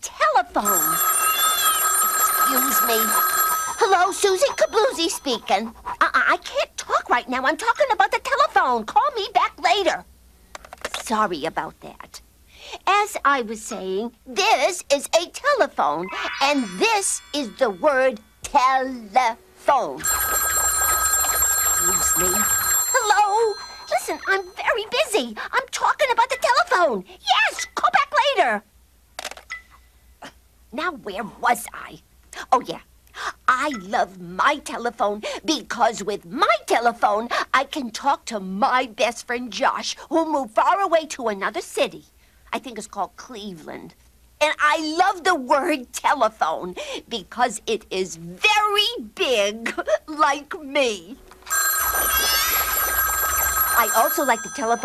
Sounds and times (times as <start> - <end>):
Speech: 0.0 - 1.0, 3.8 - 10.1, 10.9 - 12.2, 12.8 - 20.0, 21.8 - 28.7, 30.7 - 51.2, 53.8 - 54.8
Telephone bell ringing: 0.6 - 5.4, 16.1 - 18.3, 20.0 - 24.7, 51.4 - 54.8.